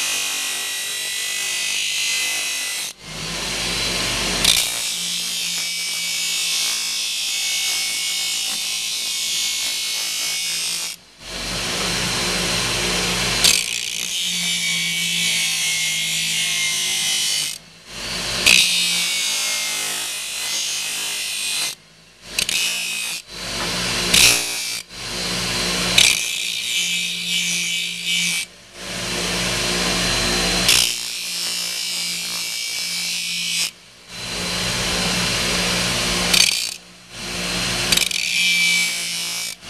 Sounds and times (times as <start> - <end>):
Tools: 4.4 - 6.8, 13.4 - 14.4, 18.4 - 18.8, 21.4 - 24.8, 25.9 - 26.9, 36.3 - 36.8, 37.8 - 39.6.